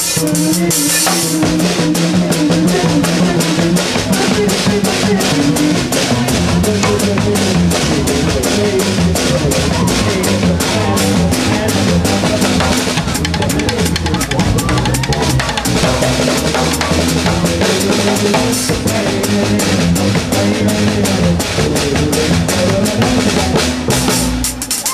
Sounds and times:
Music: 0.0 - 24.9.

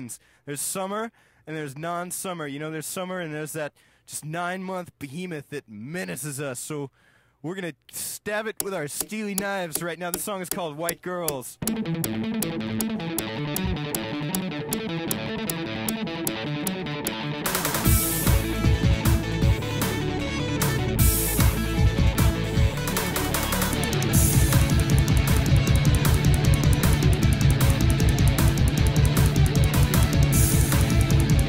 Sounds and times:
Theme music: 11.6 - 31.4.

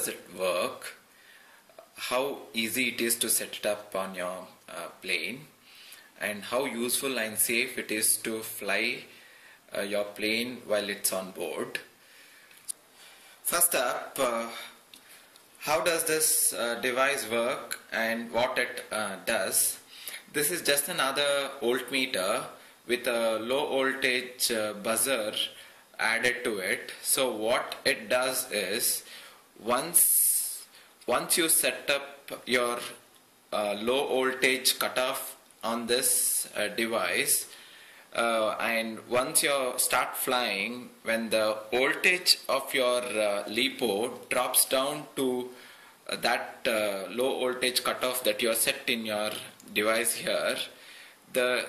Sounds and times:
Speech: 0.0 - 1.0, 1.8 - 5.6, 6.2 - 9.1, 9.7 - 11.9, 13.4 - 14.8, 15.6 - 37.5, 38.2 - 51.6.

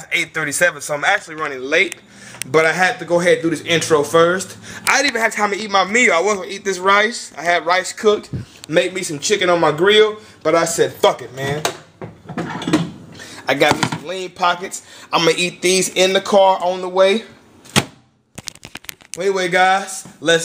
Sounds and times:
Speech: 0.0 - 11.8, 13.4 - 17.4, 19.2 - 20.4
Inside, small room: 0.0 - 20.4.

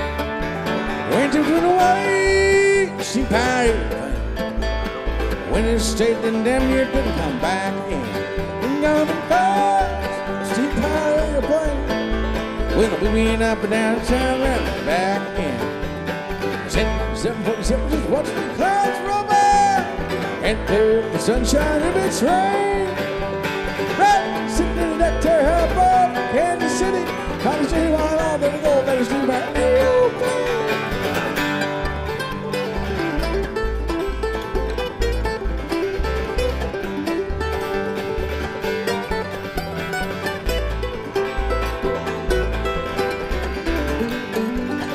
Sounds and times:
Bluegrass: 0.0 - 44.9.

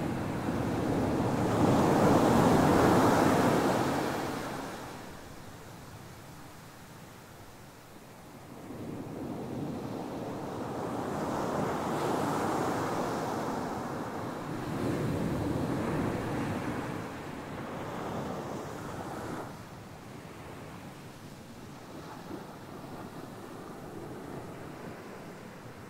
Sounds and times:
Wind: 0.0 - 25.8.

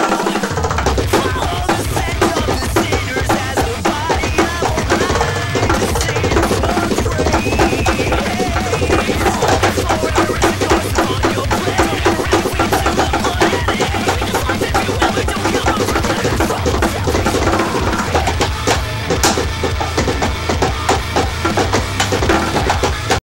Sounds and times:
Speech: 0.0 - 18.4
Music: 0.0 - 23.2.

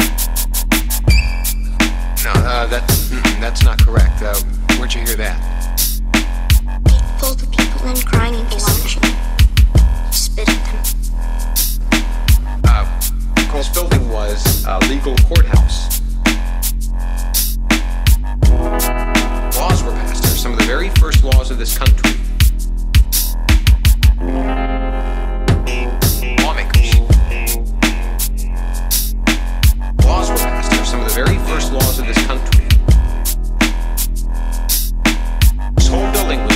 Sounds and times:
Dubstep: 0.0 - 24.2, 25.5 - 36.5
Speech: 2.2 - 5.4, 6.9 - 9.2, 10.1 - 10.9, 12.7 - 15.9, 19.6 - 22.2, 26.3 - 27.3, 30.0 - 32.8, 35.8 - 36.5.

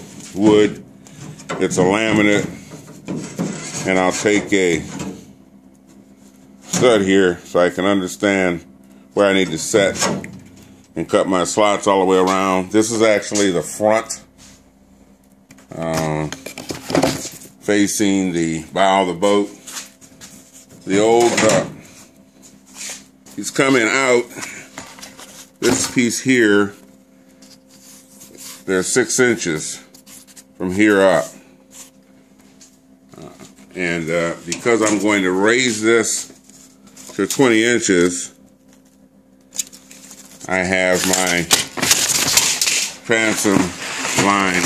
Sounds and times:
Speech: 0.4 - 0.8, 1.6 - 2.6, 3.8 - 5.0, 6.7 - 10.2, 11.0 - 14.3, 15.7 - 16.4, 17.6 - 19.6, 20.9 - 21.8, 23.4 - 24.4, 25.6 - 26.8, 28.6 - 29.9, 30.6 - 31.4, 33.1 - 36.4, 37.1 - 38.4, 40.4 - 41.6, 43.0 - 44.6.

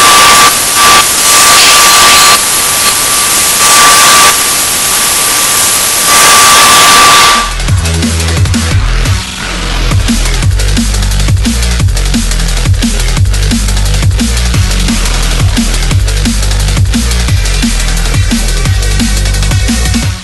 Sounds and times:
Music: 0.0 - 4.6, 6.1 - 20.2.

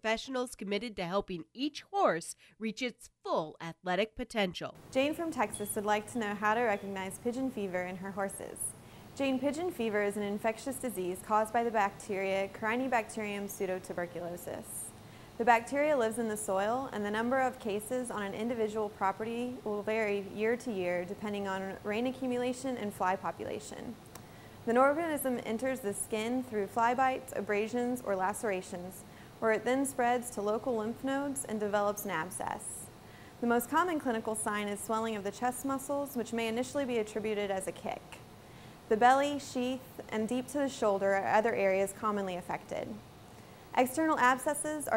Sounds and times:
Speech: 0.0 - 24.0, 24.7 - 38.2, 38.9 - 43.0, 43.8 - 44.9.

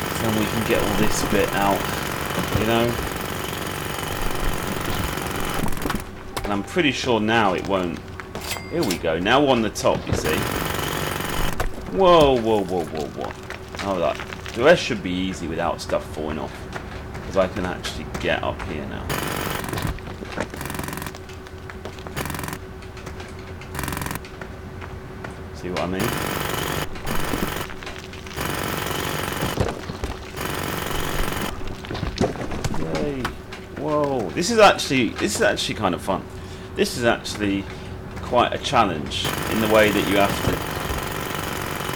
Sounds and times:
Jackhammer: 0.0 - 6.0, 10.2 - 12.2, 19.1 - 21.2, 22.1 - 22.6, 23.7 - 24.2, 26.0 - 31.6, 39.2 - 41.9
Speech: 0.2 - 1.8, 2.5 - 3.0, 6.4 - 8.0, 8.7 - 10.5, 11.9 - 16.6, 17.3 - 19.1, 25.6 - 26.1, 32.8 - 40.6.

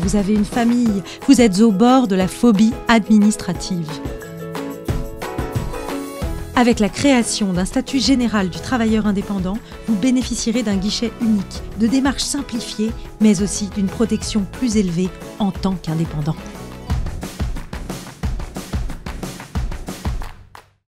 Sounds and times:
Speech: 0.0 - 4.0, 6.6 - 16.4
Music: 0.0 - 20.8.

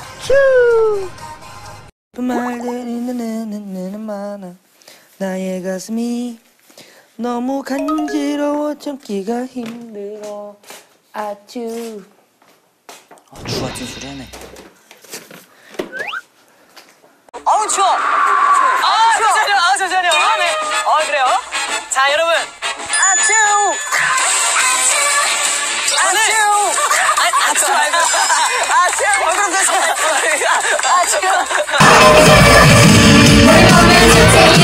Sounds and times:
Music: 0.0 - 1.9, 20.0 - 26.6, 31.6 - 34.6
Speech: 13.3 - 14.4.

